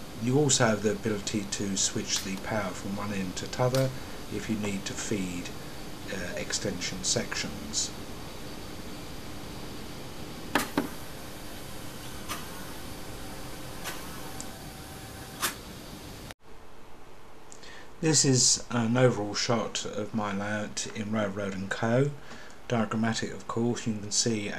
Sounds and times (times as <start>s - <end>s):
Speech: 0.2s - 8.0s, 18.0s - 24.5s.